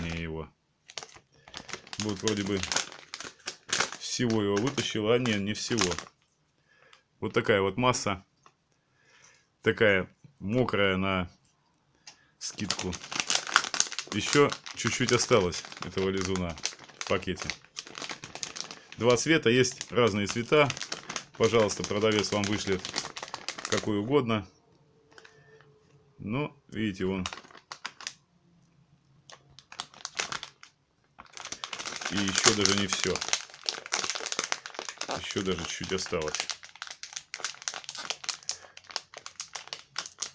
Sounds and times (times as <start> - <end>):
Crumpling, crinkling: 0.0 - 0.2, 0.8 - 7.0, 12.4 - 24.1, 25.1 - 25.7, 27.0 - 28.2, 29.2 - 40.3
Speech: 0.0 - 0.6, 2.0 - 2.8, 4.0 - 6.1, 7.2 - 8.3, 9.6 - 11.4, 12.4 - 13.0, 14.1 - 17.6, 19.0 - 20.8, 21.4 - 23.0, 23.7 - 24.6, 26.2 - 27.4, 32.1 - 33.3, 35.0 - 36.4.